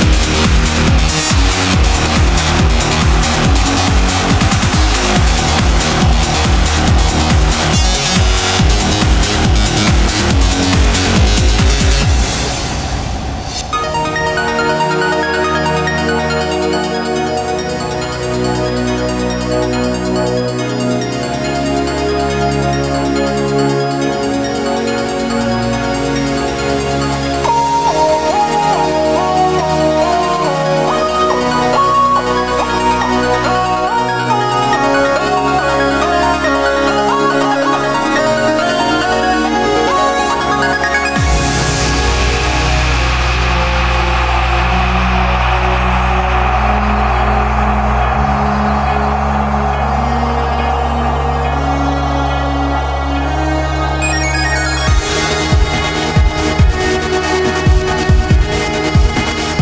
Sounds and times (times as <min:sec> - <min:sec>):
Video game music: 0:00.0 - 0:12.6, 0:13.5 - 0:42.5, 0:54.0 - 0:59.6.